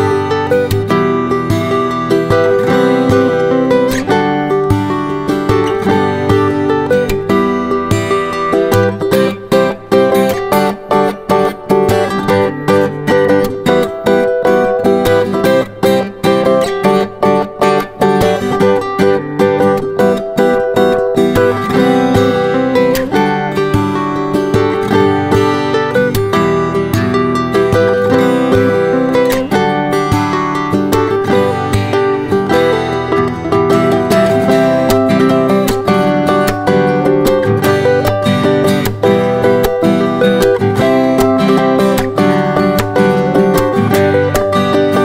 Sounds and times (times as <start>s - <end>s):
Electric guitar: 0.0s - 45.0s
Strum: 0.0s - 45.0s.